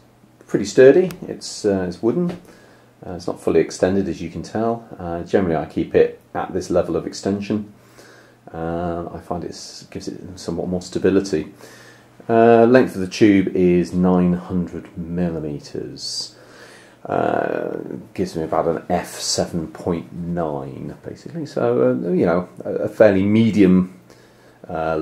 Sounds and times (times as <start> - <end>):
Speech: 0.5 - 7.8, 8.5 - 11.6, 12.3 - 16.4, 17.0 - 24.0, 24.6 - 25.0.